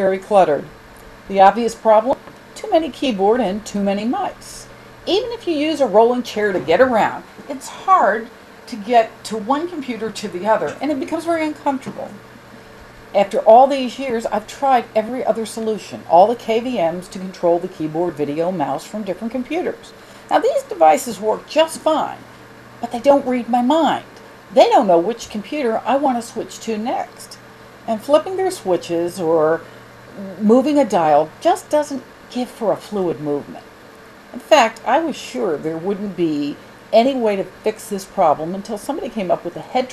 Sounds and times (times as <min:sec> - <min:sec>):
Speech: 0:00.0 - 0:00.7, 0:01.3 - 0:12.2, 0:13.2 - 0:29.6, 0:30.2 - 0:33.7, 0:34.4 - 0:39.9.